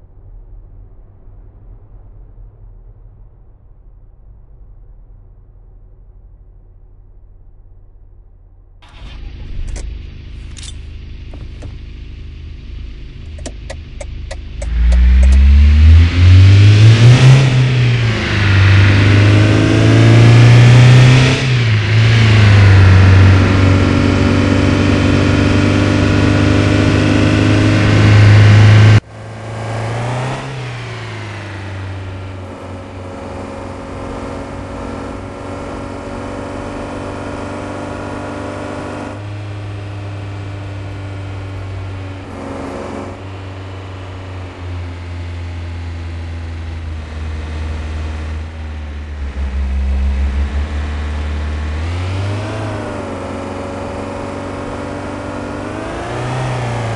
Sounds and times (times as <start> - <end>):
Car: 0.0 - 56.9.